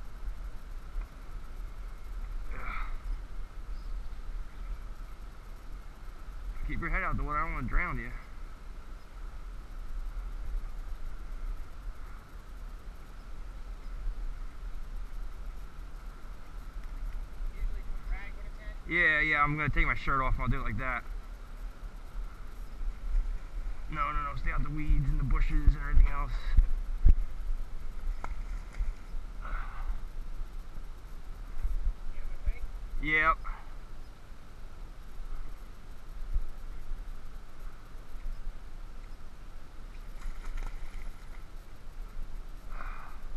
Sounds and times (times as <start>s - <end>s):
Speech: 17.6s - 21.0s.